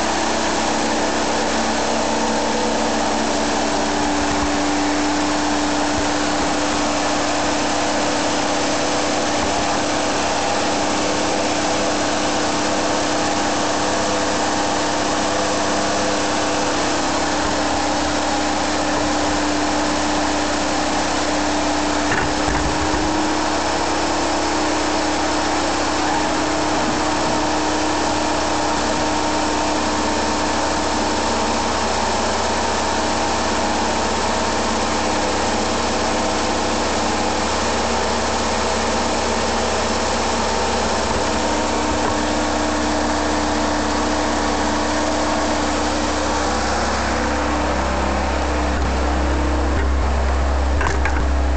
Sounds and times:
Idling: 0:00.0 - 0:51.5
Vehicle: 0:00.0 - 0:51.5.

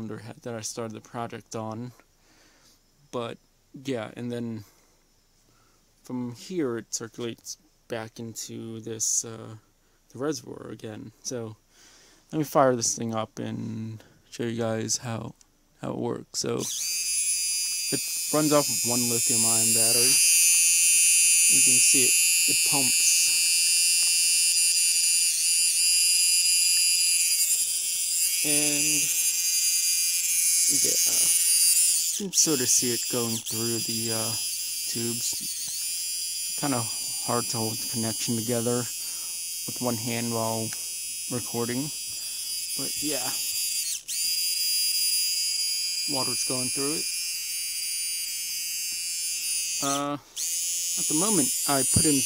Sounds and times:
Speech: 0:00.0 - 0:02.0, 0:03.1 - 0:04.7, 0:06.1 - 0:11.6, 0:12.3 - 0:16.6, 0:17.9 - 0:20.2, 0:21.5 - 0:23.3, 0:28.4 - 0:29.1, 0:30.7 - 0:31.3, 0:32.2 - 0:35.5, 0:36.6 - 0:38.9, 0:39.7 - 0:40.7, 0:41.3 - 0:42.0, 0:42.8 - 0:43.4, 0:46.1 - 0:47.0, 0:49.8 - 0:50.2, 0:51.0 - 0:52.2.

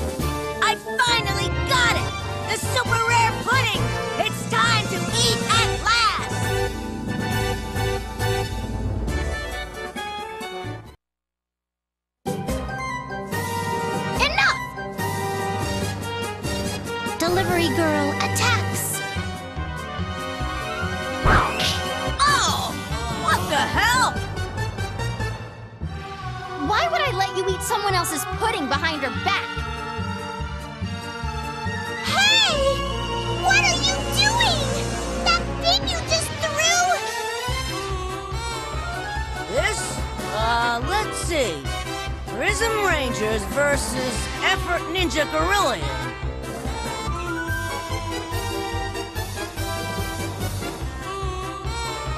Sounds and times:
Music: 0:00.0 - 0:11.0, 0:12.2 - 0:52.1.

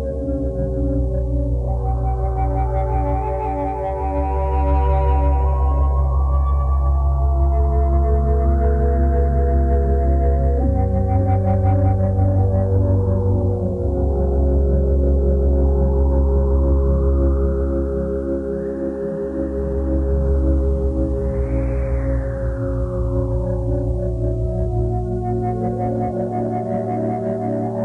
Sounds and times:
Music: 0:00.0 - 0:27.8.

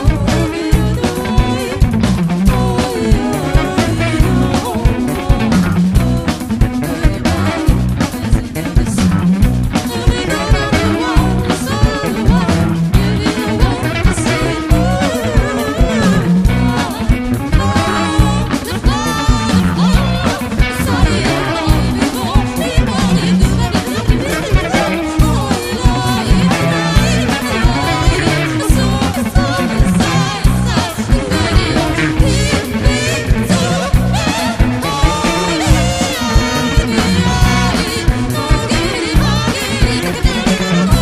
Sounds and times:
Drum kit: 0:00.0 - 0:41.0
Guitar: 0:00.0 - 0:41.0
Singing: 0:00.0 - 0:41.0
Ska: 0:00.0 - 0:41.0
Bass drum: 0:00.1 - 0:41.0.

